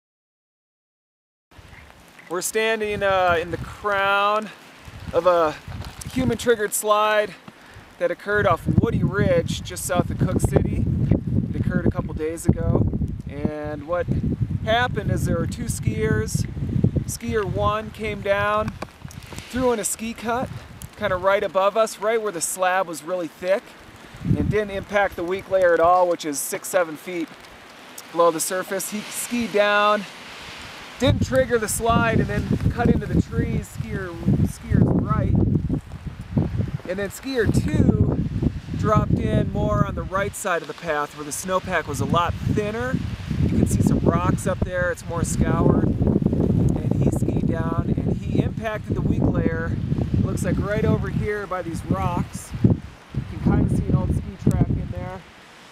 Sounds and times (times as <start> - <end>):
Rustling leaves: 1.6 - 55.7
Speech: 2.3 - 7.4, 8.0 - 10.8, 11.6 - 14.1, 14.7 - 16.5, 17.1 - 18.7, 19.5 - 23.7, 24.4 - 27.3, 28.0 - 30.1, 31.0 - 35.4, 36.9 - 38.1, 38.8 - 45.9, 46.8 - 52.6, 53.3 - 55.3
Wind noise (microphone): 4.9 - 6.5, 8.4 - 21.3, 24.0 - 25.6, 30.5 - 40.4, 41.6 - 55.2.